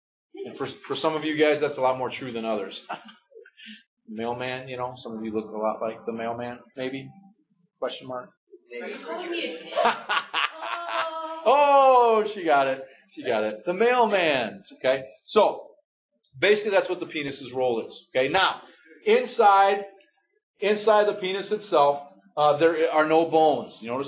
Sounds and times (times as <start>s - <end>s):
Male speech, man speaking: 0.4s - 3.0s, 4.1s - 7.2s, 7.8s - 9.1s, 11.5s - 15.8s, 16.4s - 20.0s, 20.6s - 24.0s
Chuckle, chortle: 2.8s - 3.8s, 9.7s - 11.2s.